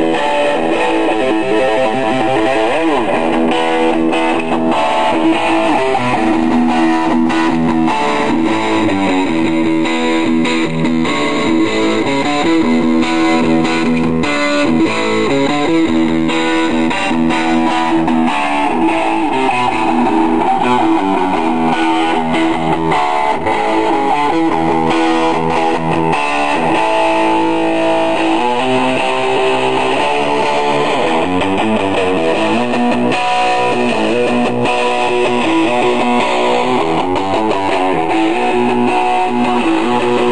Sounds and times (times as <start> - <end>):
Music: 0.0 - 40.3.